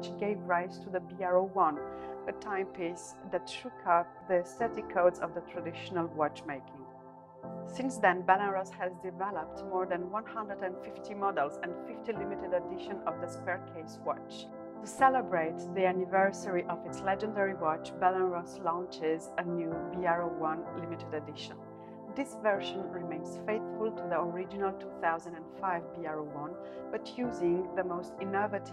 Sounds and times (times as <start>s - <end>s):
Speech: 0.0s - 6.8s, 7.7s - 21.6s, 22.2s - 28.7s
Music: 0.0s - 28.7s.